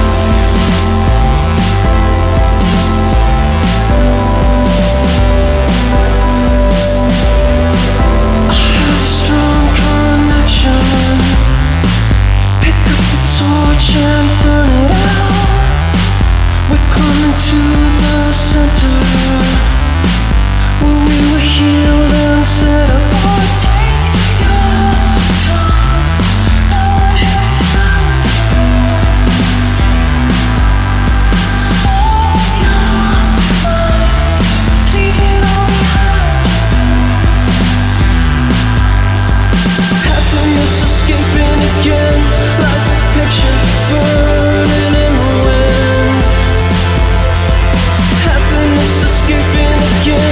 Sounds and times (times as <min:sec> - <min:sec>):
Music: 0:00.0 - 0:50.3.